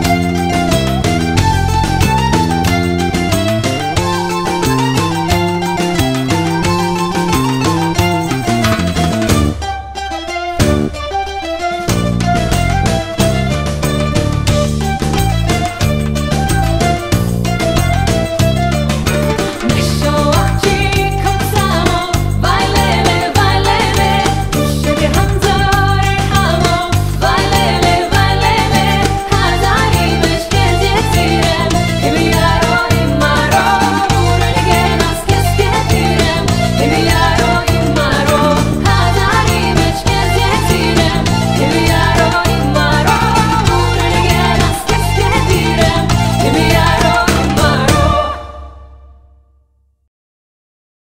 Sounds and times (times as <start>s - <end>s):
Music: 0.0s - 50.1s
Singing: 19.6s - 48.8s.